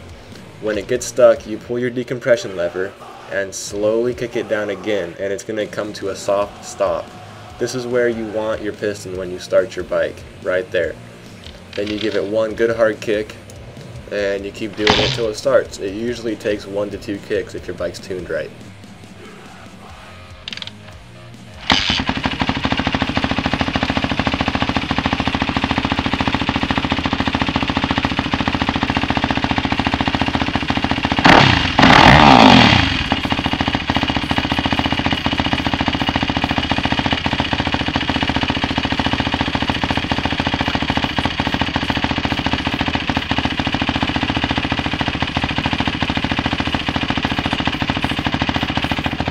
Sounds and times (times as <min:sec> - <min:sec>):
Motorcycle: 0:00.0 - 0:01.6, 0:05.8 - 0:49.3
Outside, urban or manmade: 0:00.0 - 0:49.3.